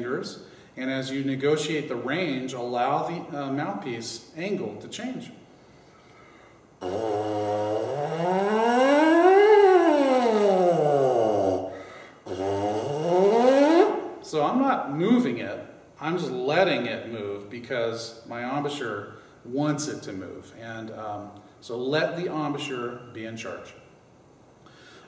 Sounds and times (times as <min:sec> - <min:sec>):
Speech: 0:00.0 - 0:05.4, 0:14.2 - 0:23.8.